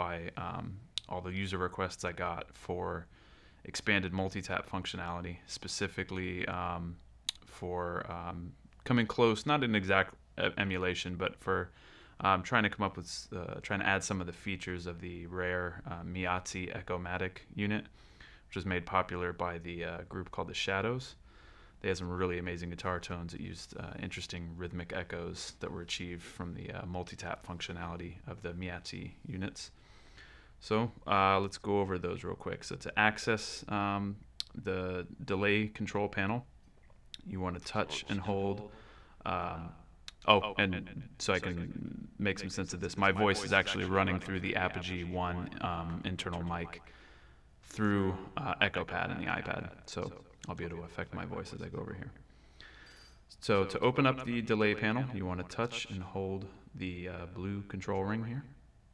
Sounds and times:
Speech: 0:00.0 - 0:17.9, 0:18.5 - 0:21.2, 0:21.8 - 0:29.8, 0:30.6 - 0:36.5, 0:37.2 - 0:46.9, 0:47.7 - 0:52.2, 0:53.3 - 0:58.6.

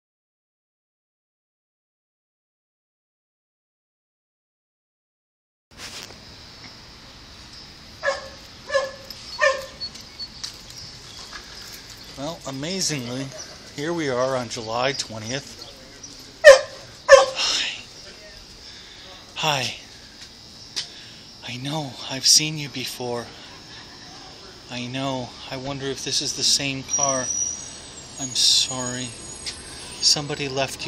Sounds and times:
Speech: 0:12.2 - 0:16.5, 0:17.4 - 0:19.9, 0:21.4 - 0:27.4, 0:28.2 - 0:29.2, 0:30.0 - 0:30.8.

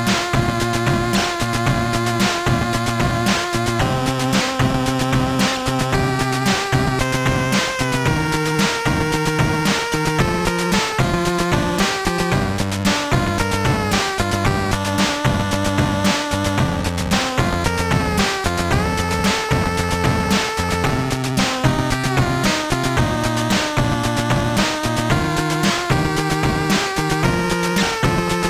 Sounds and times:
Video game music: 0:00.0 - 0:28.4.

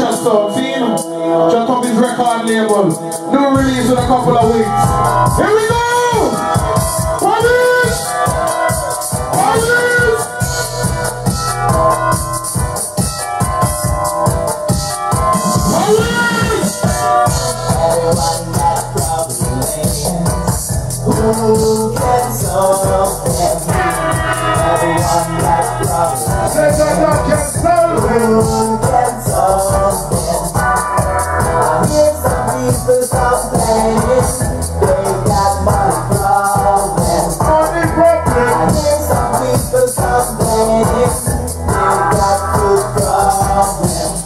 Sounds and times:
Music: 0:00.0 - 0:44.2.

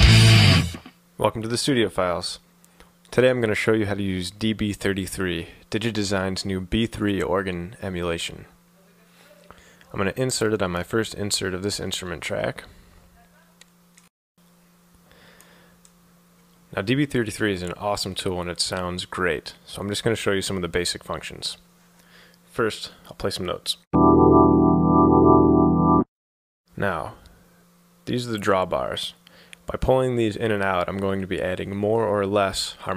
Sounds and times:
Music: 0:00.0 - 0:00.9, 0:24.0 - 0:26.1
Speech: 0:01.2 - 0:02.4, 0:03.1 - 0:13.6, 0:16.7 - 0:21.6, 0:22.5 - 0:23.8, 0:26.8 - 0:27.2, 0:28.0 - 0:32.9.

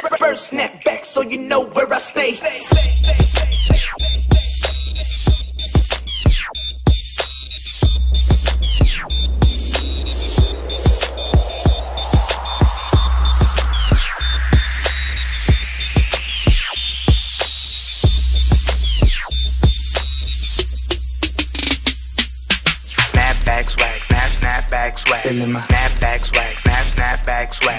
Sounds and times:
Music: 0:00.0 - 0:27.7.

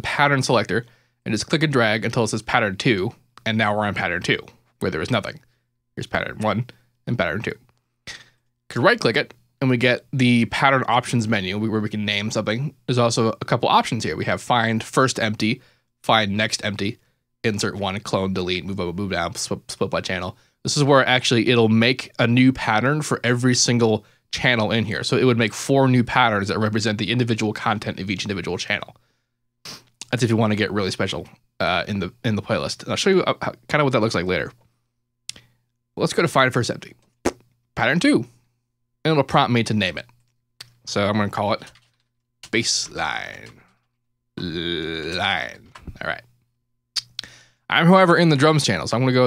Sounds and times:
Speech: 0:00.0 - 0:05.4, 0:06.0 - 0:29.0, 0:30.0 - 0:34.6, 0:36.0 - 0:37.0, 0:37.8 - 0:38.4, 0:39.1 - 0:41.8, 0:42.5 - 0:43.6, 0:44.4 - 0:46.3, 0:47.0 - 0:49.2.

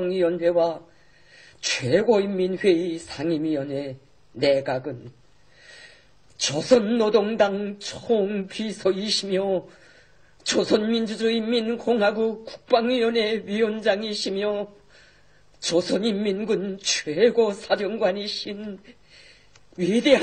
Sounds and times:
Speech: 0:00.0 - 0:00.9, 0:01.6 - 0:05.2, 0:06.4 - 0:09.7, 0:10.4 - 0:14.8, 0:15.6 - 0:19.0, 0:19.8 - 0:20.2.

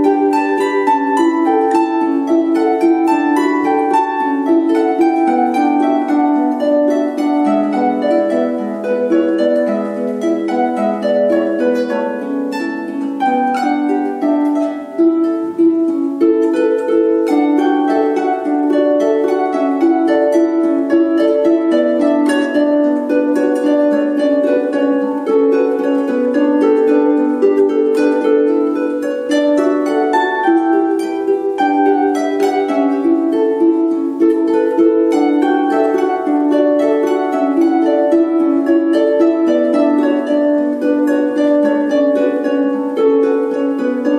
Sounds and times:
Harp: 0:00.0 - 0:44.1
Pizzicato: 0:00.0 - 0:44.1.

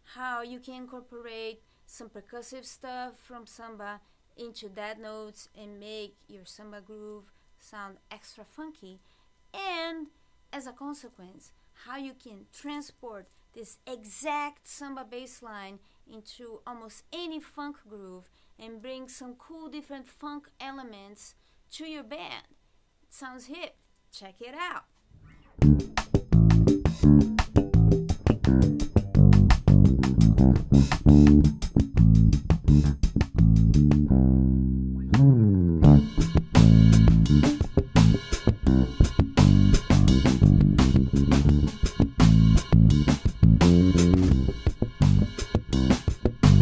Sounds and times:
Speech: 0:00.0 - 0:24.9.

